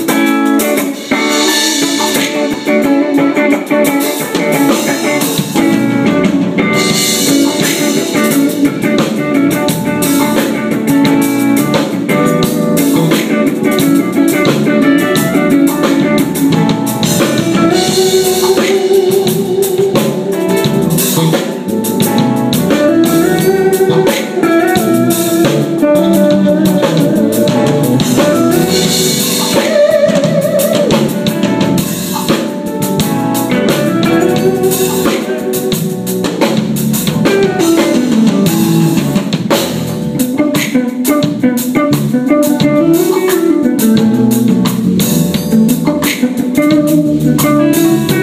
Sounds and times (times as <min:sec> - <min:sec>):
Music: 0:00.0 - 0:48.2.